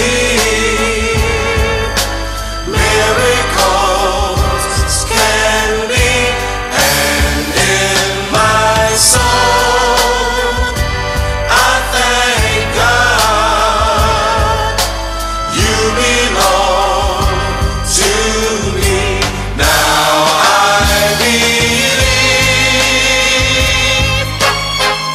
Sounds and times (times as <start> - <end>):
Jingle (music): 0.0 - 25.1.